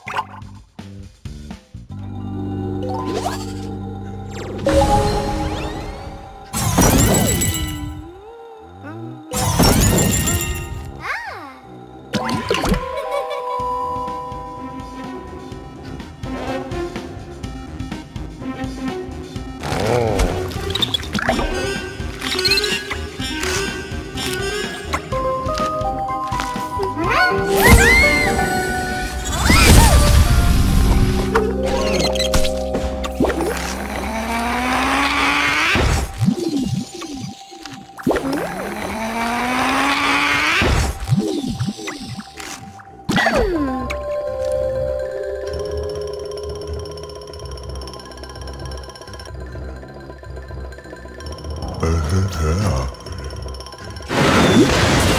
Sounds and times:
Music: 0:00.0 - 0:55.1.

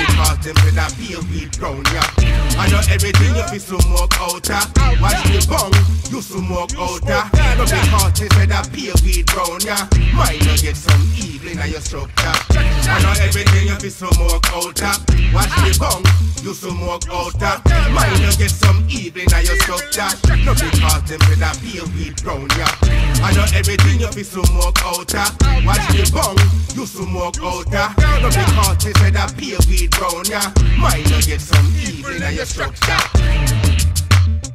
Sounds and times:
Hip hop music: 0:00.0 - 0:34.5.

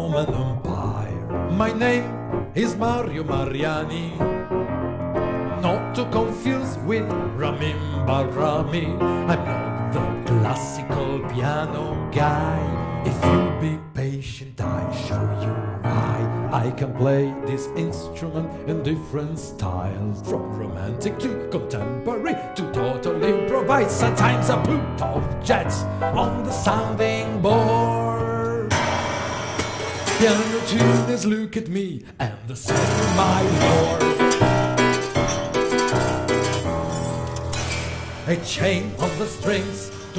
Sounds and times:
Male singing: 0:00.0 - 0:04.4, 0:05.5 - 0:28.7, 0:30.0 - 0:34.6, 0:38.2 - 0:40.1
Music: 0:00.0 - 0:40.1.

